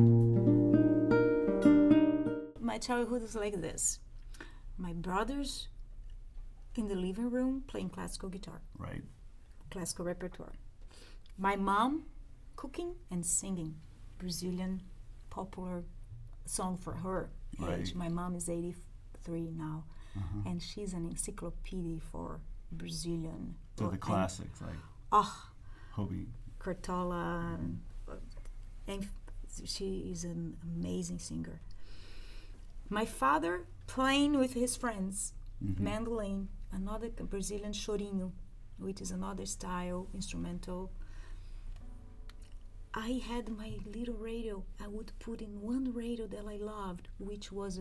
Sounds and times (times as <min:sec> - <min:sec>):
Speech: 0:02.6 - 0:04.0, 0:04.8 - 0:05.7, 0:16.5 - 0:28.2, 0:28.9 - 0:31.6, 0:32.9 - 0:40.9, 0:43.0 - 0:47.8.